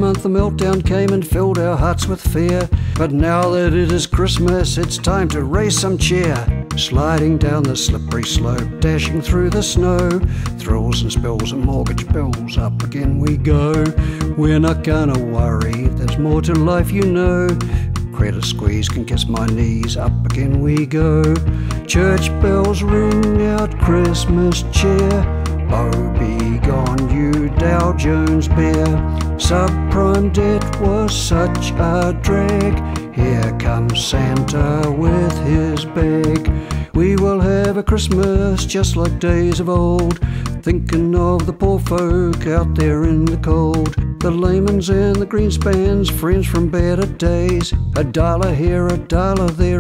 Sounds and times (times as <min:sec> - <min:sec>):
Music: 0:00.0 - 0:49.8.